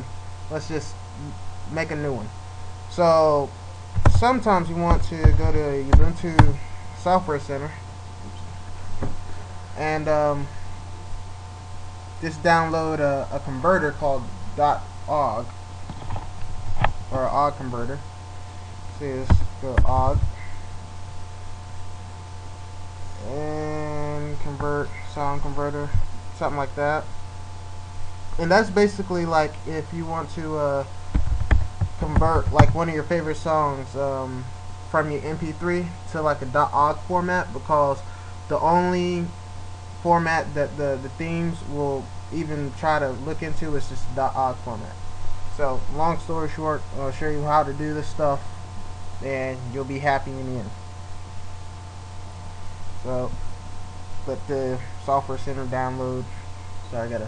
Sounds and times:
Speech: 0:00.0 - 0:08.5, 0:09.8 - 0:10.6, 0:12.2 - 0:15.5, 0:17.1 - 0:18.1, 0:19.0 - 0:20.3, 0:23.2 - 0:27.1, 0:28.4 - 0:30.9, 0:32.0 - 0:39.4, 0:40.0 - 0:48.4, 0:49.2 - 0:50.8, 0:53.0 - 0:53.4, 0:54.3 - 0:57.2.

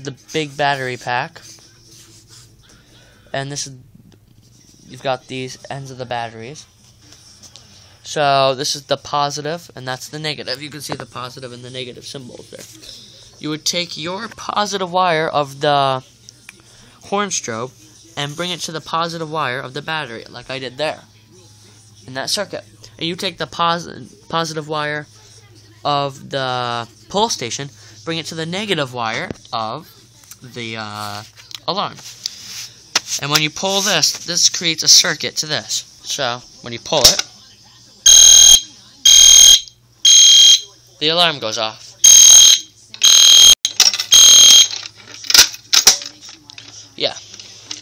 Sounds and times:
Speech: 0:00.0 - 0:01.6, 0:08.0 - 0:32.0, 0:33.2 - 0:38.0
Fire alarm: 0:38.1 - 0:40.7, 0:42.0 - 0:44.8.

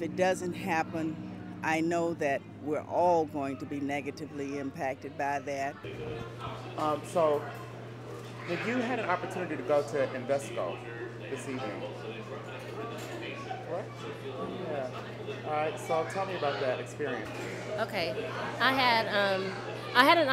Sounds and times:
Conversation: 0:00.0 - 0:20.3
Male speech, man speaking: 0:01.7 - 0:07.5, 0:08.4 - 0:17.3.

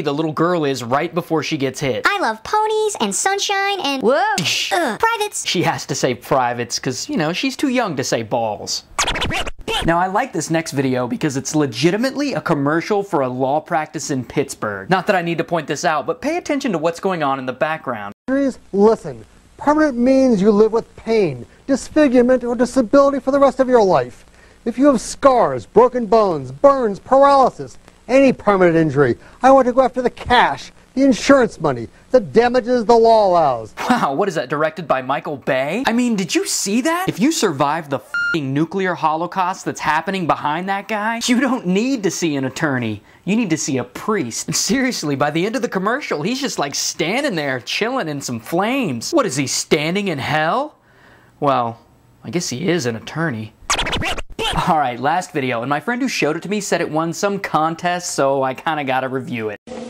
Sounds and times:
Speech: 0:00.0 - 0:08.9, 0:09.7 - 0:50.8, 0:51.4 - 0:53.6, 0:54.4 - 0:59.6
Inside, small room: 0:00.0 - 0:59.8.

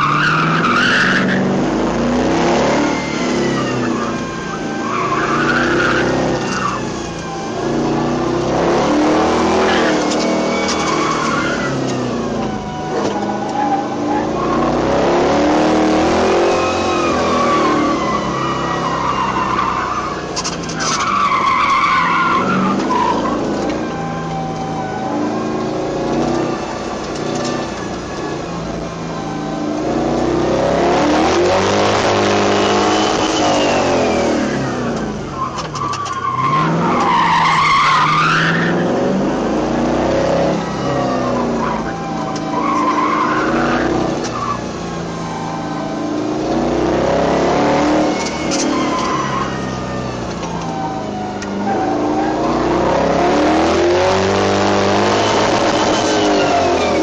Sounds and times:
Car: 0:00.0 - 0:57.0.

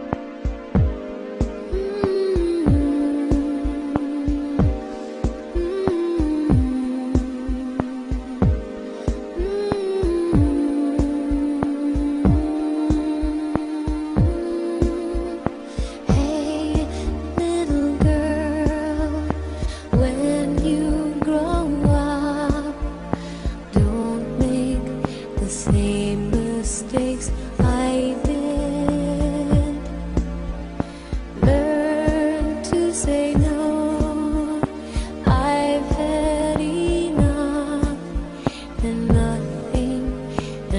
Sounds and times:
Music: 0:00.0 - 0:40.7.

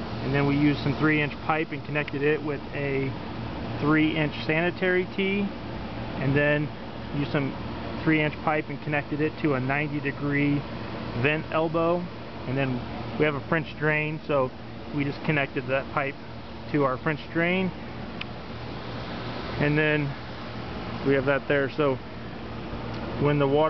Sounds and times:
Speech: 0:00.2 - 0:03.2, 0:03.8 - 0:05.6, 0:06.2 - 0:10.6, 0:11.2 - 0:17.8, 0:19.6 - 0:20.2, 0:21.0 - 0:22.0, 0:23.2 - 0:23.6.

